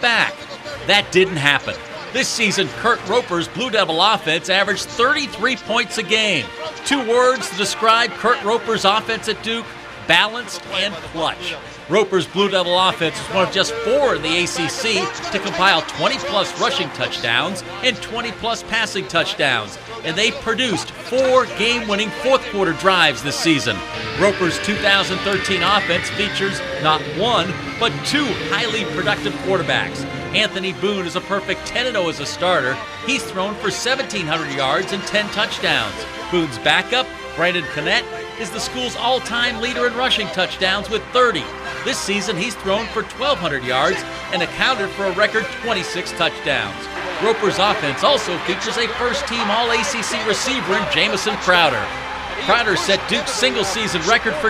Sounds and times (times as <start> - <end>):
Male speech, man speaking: 0.0 - 54.5
Music: 0.0 - 54.5.